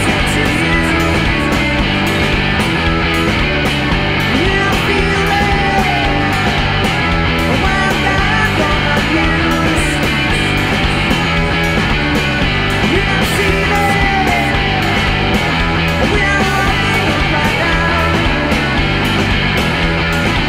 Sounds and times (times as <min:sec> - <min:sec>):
Funk: 0:00.0 - 0:20.4.